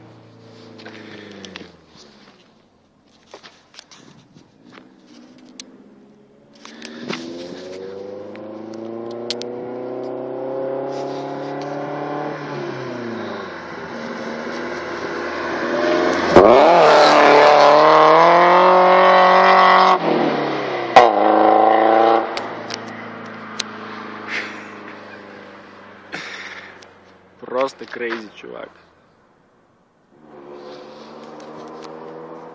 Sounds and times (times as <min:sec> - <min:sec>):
Car passing by: 0:06.5 - 0:26.9.